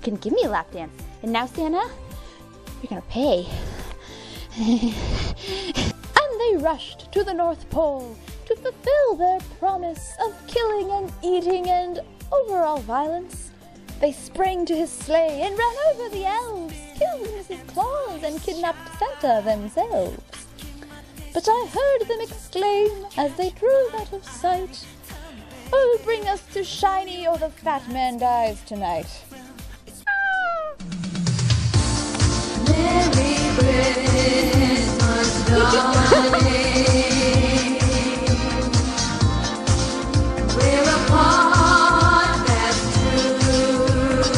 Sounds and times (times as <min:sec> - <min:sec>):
Speech: 0:00.0 - 0:02.0, 0:02.8 - 0:03.5, 0:06.2 - 0:20.2, 0:21.4 - 0:24.9, 0:25.7 - 0:30.1
Christmas music: 0:00.0 - 0:07.4, 0:31.8 - 0:44.3
Christian music: 0:03.6 - 0:06.1, 0:31.7 - 0:44.3.